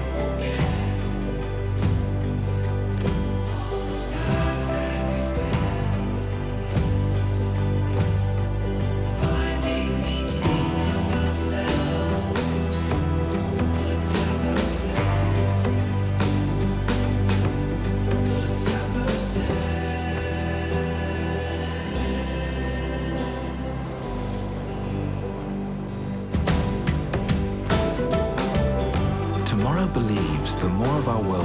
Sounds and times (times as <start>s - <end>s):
Music: 0.0s - 31.4s.